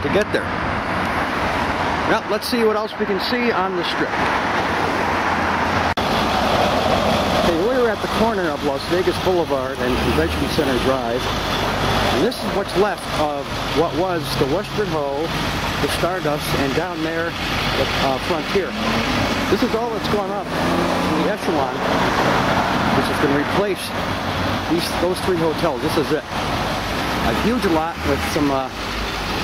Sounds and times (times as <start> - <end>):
Speech: 0.0 - 0.5, 2.1 - 4.2, 7.4 - 11.3, 12.2 - 18.9, 19.5 - 20.5, 21.1 - 21.8, 23.0 - 24.0, 24.7 - 26.3, 27.2 - 28.8.